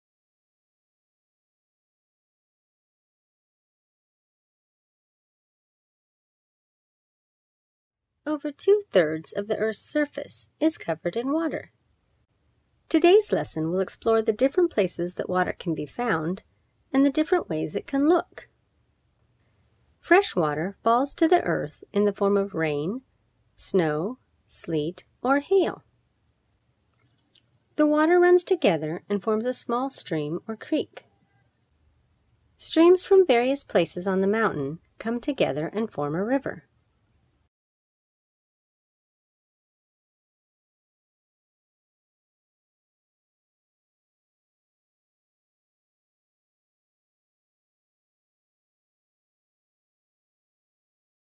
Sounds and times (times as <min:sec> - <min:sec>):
Speech: 0:08.3 - 0:11.7, 0:12.9 - 0:16.4, 0:17.0 - 0:18.5, 0:20.0 - 0:23.0, 0:23.6 - 0:25.8, 0:27.8 - 0:31.0, 0:32.6 - 0:36.6.